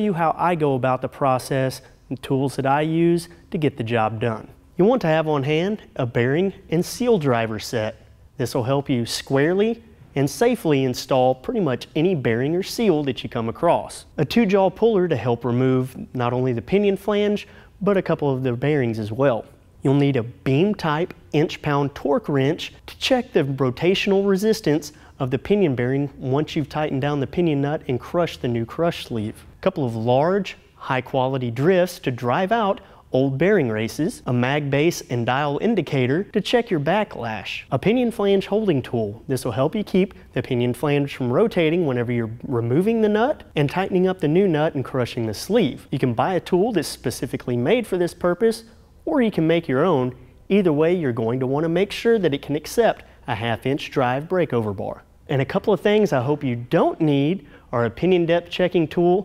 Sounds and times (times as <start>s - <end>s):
Speech: 0.0s - 59.2s.